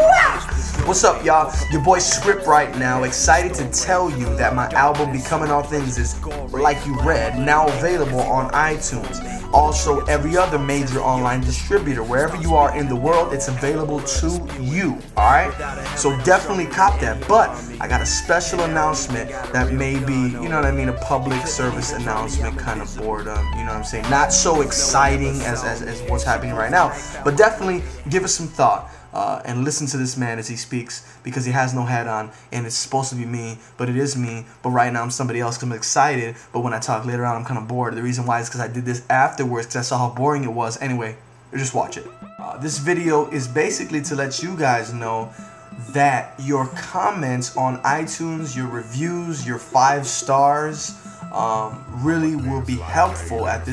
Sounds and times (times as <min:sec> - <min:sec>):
Music: 0:00.0 - 0:33.4, 0:39.5 - 0:53.7
Speech: 0:00.0 - 0:53.7.